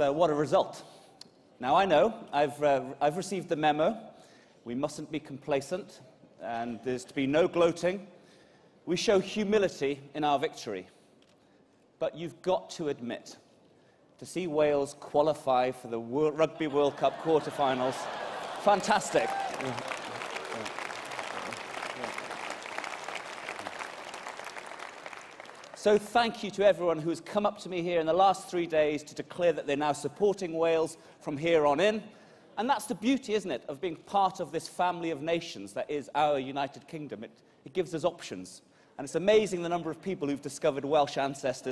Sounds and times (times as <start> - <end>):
Male speech, man speaking: 0.0 - 0.8, 1.6 - 4.1, 4.7 - 8.1, 8.9 - 10.9, 12.0 - 13.4, 14.2 - 19.9, 25.8 - 41.7
Narration, monologue: 0.0 - 22.2, 25.4 - 41.7.